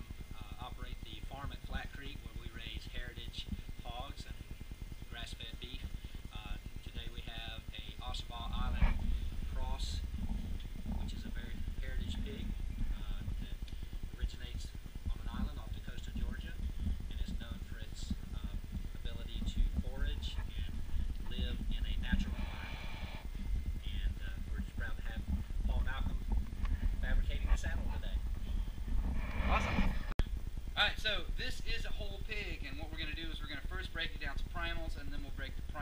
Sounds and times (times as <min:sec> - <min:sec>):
Speech: 0:00.3 - 0:04.4, 0:05.1 - 0:09.0, 0:09.6 - 0:10.0, 0:10.9 - 0:13.6, 0:14.2 - 0:22.5, 0:23.8 - 0:26.2, 0:27.0 - 0:28.2, 0:30.8 - 0:35.8.